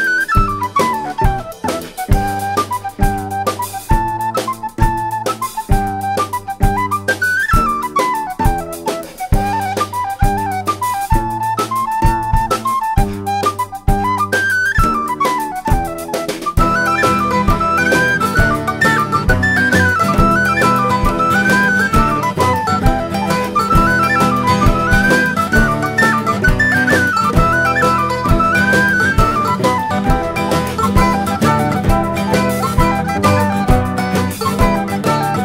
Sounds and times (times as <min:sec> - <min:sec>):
Music: 0:00.0 - 0:35.4.